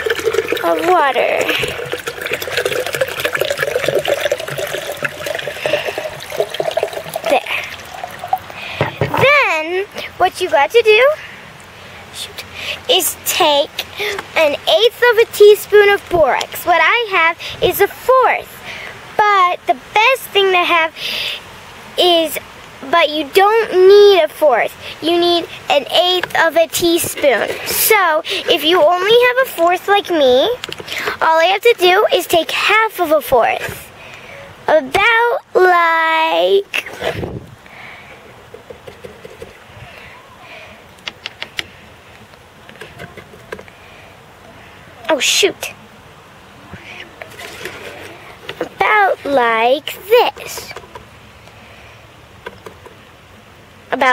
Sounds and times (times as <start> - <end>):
Water tap, faucet: 0.0 - 8.4
Water: 0.0 - 54.1
Speech: 0.6 - 1.6, 9.1 - 11.2, 12.1 - 18.6, 19.2 - 21.0, 22.0 - 30.6, 31.2 - 36.8, 45.0 - 45.8, 48.8 - 50.7, 53.9 - 54.1.